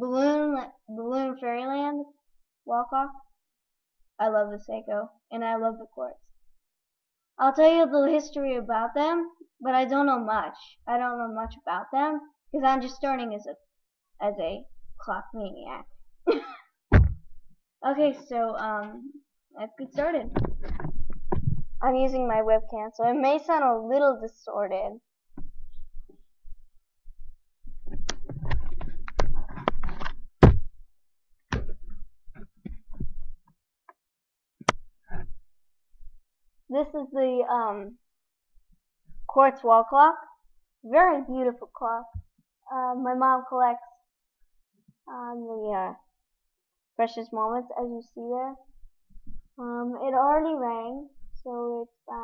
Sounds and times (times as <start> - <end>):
Speech: 0.0 - 2.1, 2.7 - 3.2, 4.2 - 6.2, 7.4 - 13.6, 14.2 - 15.8, 17.8 - 20.5, 21.8 - 25.0, 36.7 - 38.0, 39.3 - 42.1, 42.7 - 43.9, 45.1 - 46.0, 47.0 - 48.6, 49.6 - 52.2.